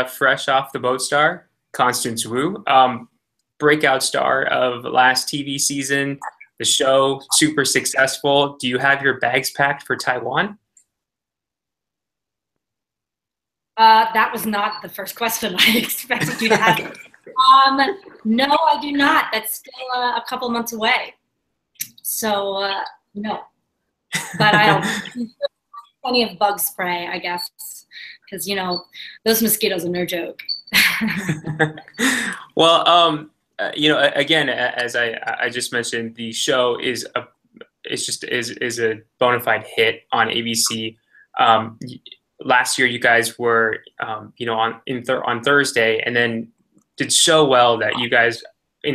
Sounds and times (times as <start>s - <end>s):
Speech: 0.0s - 3.0s, 3.6s - 10.6s, 13.8s - 21.1s, 21.8s - 23.4s, 24.2s - 48.9s.